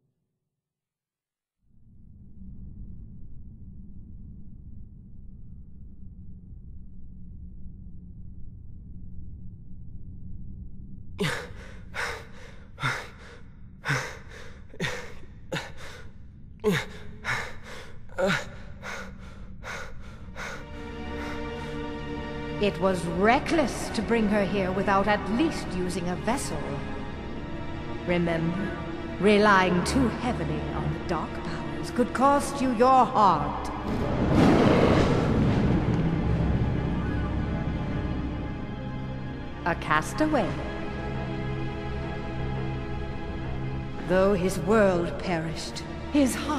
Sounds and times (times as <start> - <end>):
Music: 11.2 - 46.5
Speech: 22.6 - 26.8, 28.1 - 33.7, 39.7 - 40.7, 44.0 - 46.5.